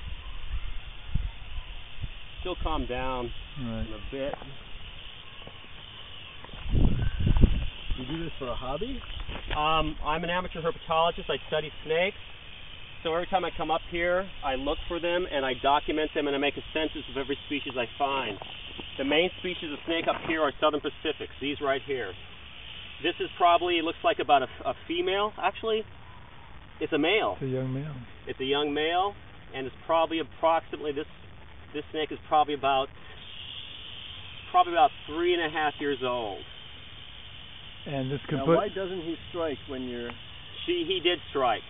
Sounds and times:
Outside, rural or natural: 0:00.0 - 0:41.7
Speech: 0:08.0 - 0:12.2, 0:13.1 - 0:18.4, 0:26.8 - 0:31.1, 0:37.9 - 0:41.6.

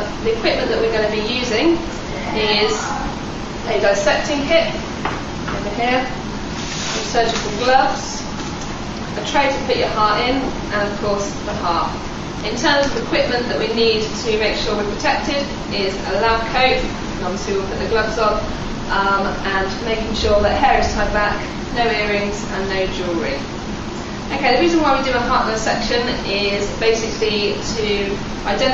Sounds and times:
Speech: 0:00.0 - 0:04.9, 0:05.6 - 0:06.2, 0:06.9 - 0:08.3, 0:09.2 - 0:23.5, 0:24.3 - 0:28.7.

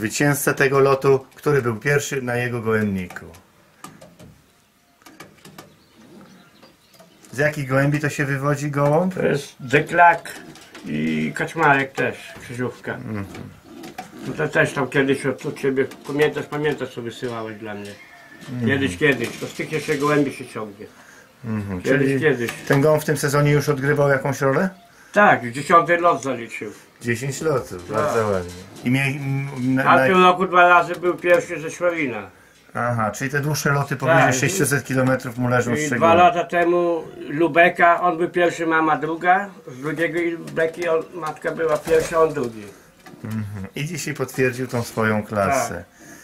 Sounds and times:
Speech: 0:00.0 - 0:03.4, 0:07.3 - 0:13.4, 0:14.2 - 0:42.7, 0:43.3 - 0:45.9
Inside, small room: 0:00.0 - 0:46.2.

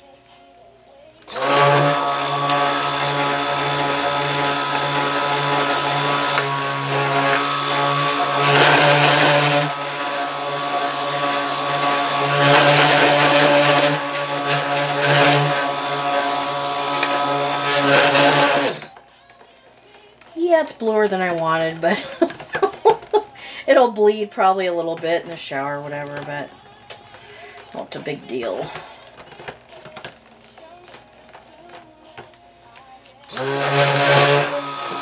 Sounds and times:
Blender: 0:01.3 - 0:19.0, 0:25.2 - 0:26.6, 0:27.4 - 0:32.3, 0:33.2 - 0:35.0.

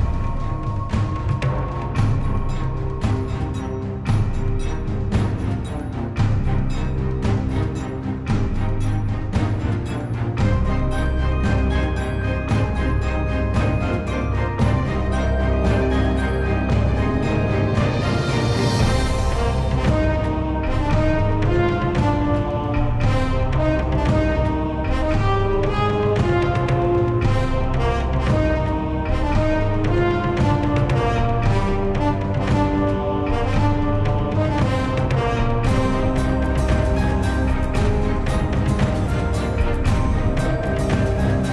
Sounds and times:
Music: 0:00.0 - 0:41.5.

